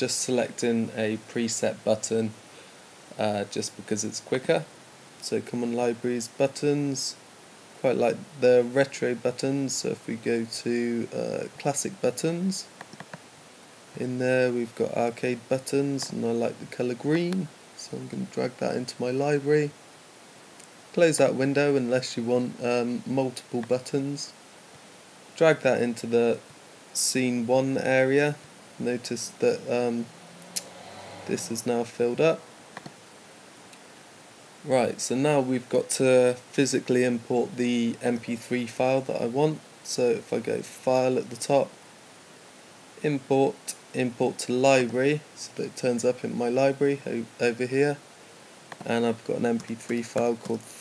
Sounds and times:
Speech: 0.0s - 2.4s, 3.2s - 7.2s, 7.8s - 12.7s, 14.0s - 19.8s, 20.9s - 24.4s, 25.4s - 26.4s, 27.0s - 30.1s, 31.3s - 32.4s, 34.7s - 41.8s, 43.0s - 48.0s, 48.8s - 50.8s.

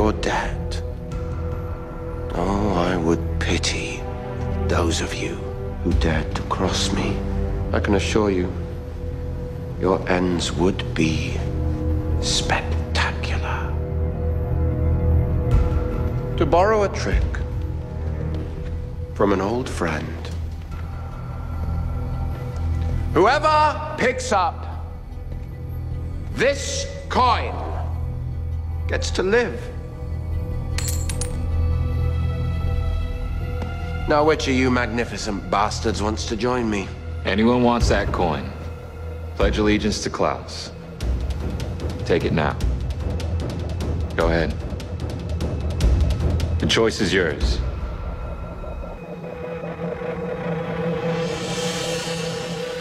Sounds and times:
Music: 0.0s - 52.8s.

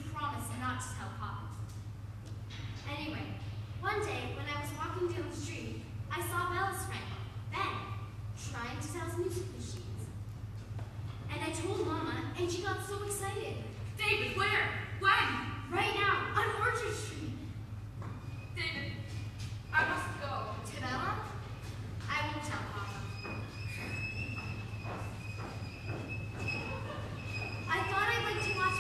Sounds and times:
Speech: 0.0s - 1.6s, 2.9s - 10.1s, 11.3s - 17.5s, 19.7s - 21.4s, 22.1s - 23.1s, 27.7s - 28.8s.

